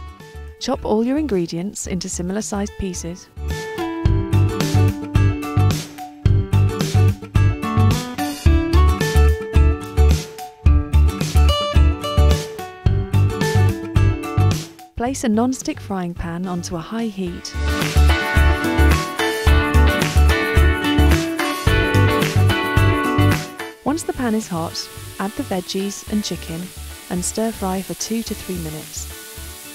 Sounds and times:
Music: 0.0s - 29.7s
Speech: 0.6s - 3.3s, 15.0s - 17.6s, 23.8s - 29.1s.

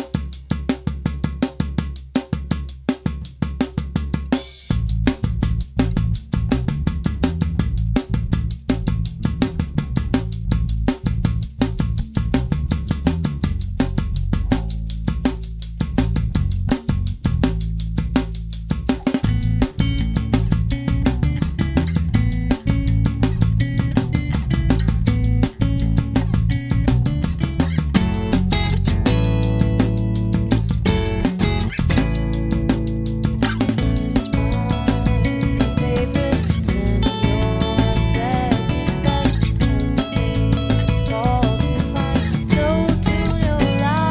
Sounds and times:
Music: 0.0s - 44.1s.

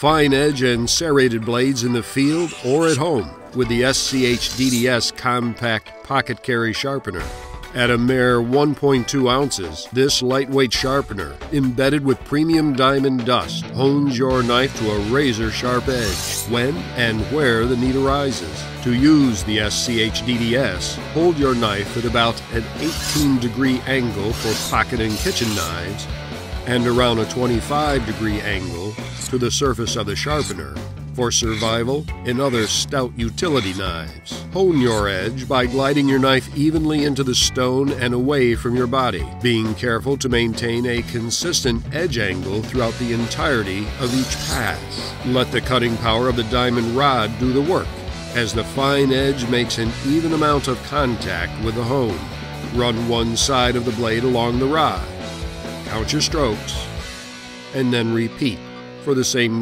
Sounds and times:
Speech: 0.0s - 55.1s, 55.9s - 56.9s, 57.7s - 59.6s
Music: 0.0s - 59.6s.

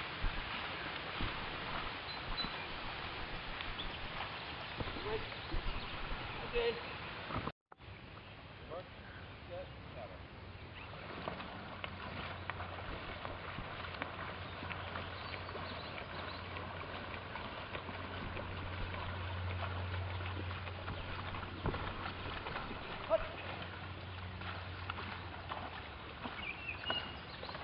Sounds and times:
Rowboat, canoe, kayak: 0.0s - 27.6s
Speech: 6.4s - 6.8s, 8.7s - 10.2s, 23.0s - 23.6s.

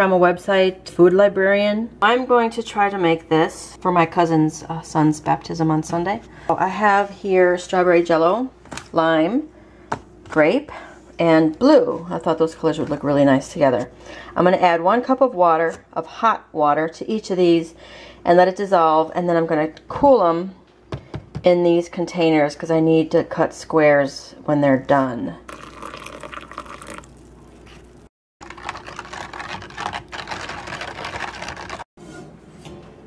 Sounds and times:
Speech: 0.0s - 9.5s, 10.3s - 20.6s, 21.4s - 25.4s.

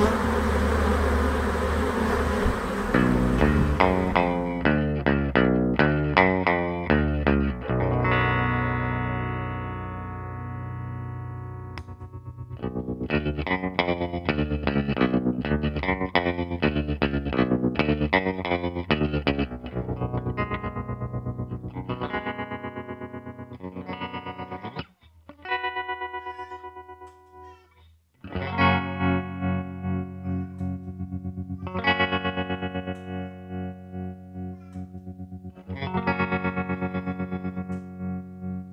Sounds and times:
Effects unit: 2.8s - 38.7s
Music: 3.0s - 27.6s, 28.2s - 38.7s.

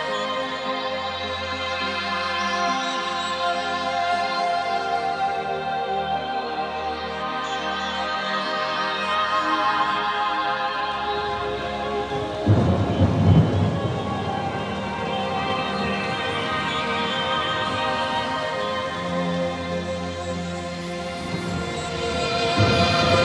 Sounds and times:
Music: 0.0s - 23.2s
Rain on surface: 11.9s - 23.2s.

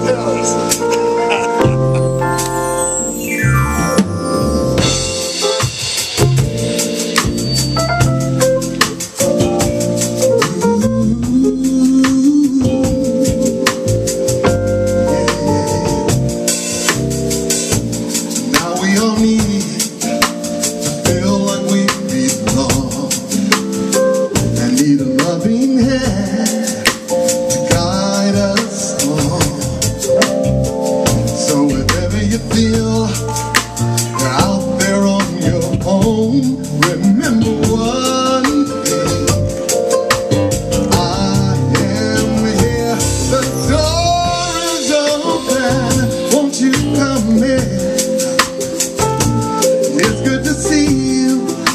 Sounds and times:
Music: 0.0s - 51.7s.

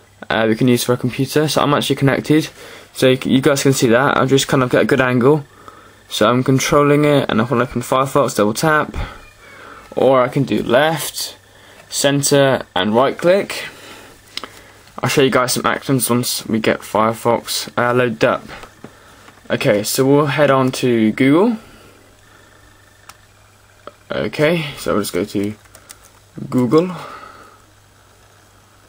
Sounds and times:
Speech: 0.2s - 5.5s, 6.1s - 9.2s, 9.9s - 13.8s, 15.0s - 18.6s, 19.5s - 21.7s, 23.9s - 25.6s, 26.4s - 27.2s.

